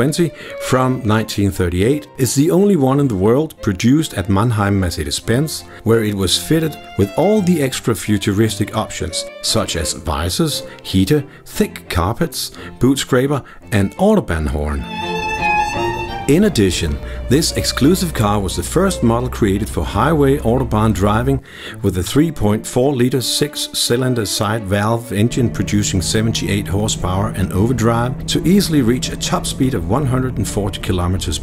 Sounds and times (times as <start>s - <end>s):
Speech: 0.0s - 14.9s, 16.3s - 31.4s
Music: 0.0s - 31.4s.